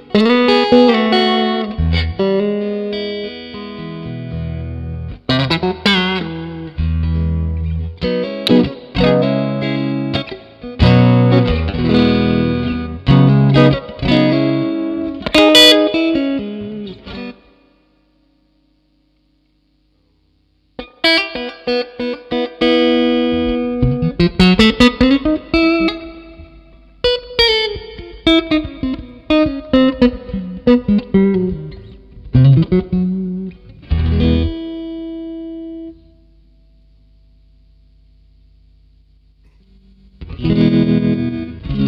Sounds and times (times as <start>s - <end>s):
Steel guitar, slide guitar: 0.0s - 17.4s, 20.8s - 36.2s, 40.2s - 41.8s
Electric guitar: 0.0s - 19.6s, 20.8s - 41.8s.